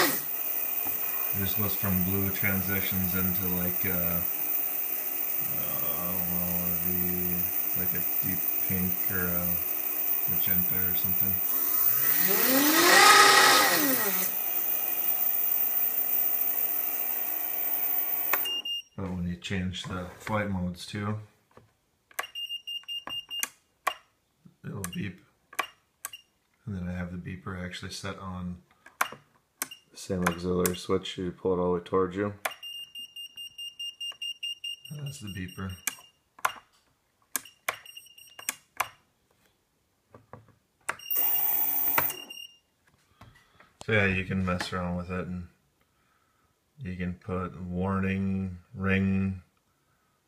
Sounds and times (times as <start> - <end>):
Speech: 1.4 - 4.3, 5.5 - 9.6, 10.3 - 11.4, 19.0 - 21.3, 24.6 - 25.2, 26.7 - 28.6, 30.0 - 32.4, 34.9 - 35.8, 43.8 - 45.6, 46.8 - 49.5.